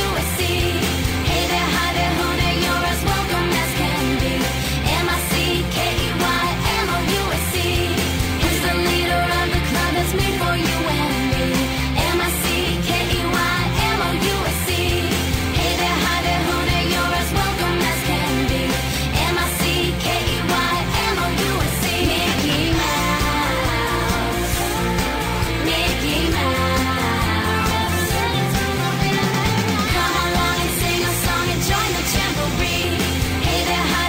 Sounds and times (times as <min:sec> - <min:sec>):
Music: 0:00.0 - 0:34.0.